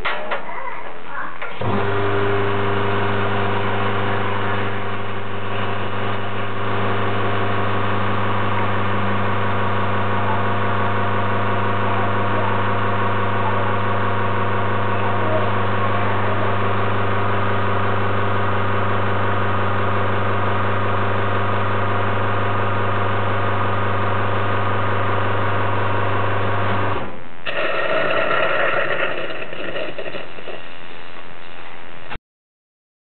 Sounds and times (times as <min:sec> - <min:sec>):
Gush: 0:27.4 - 0:30.8.